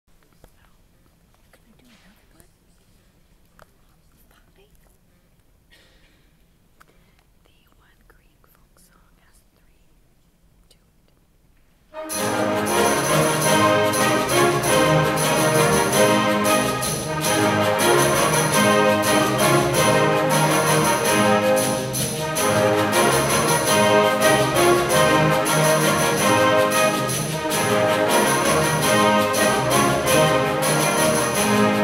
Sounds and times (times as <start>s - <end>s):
Whispering: 0.3s - 0.9s, 1.5s - 2.9s, 3.7s - 5.0s, 7.4s - 10.0s, 10.6s - 11.2s
Speech: 1.5s - 2.9s.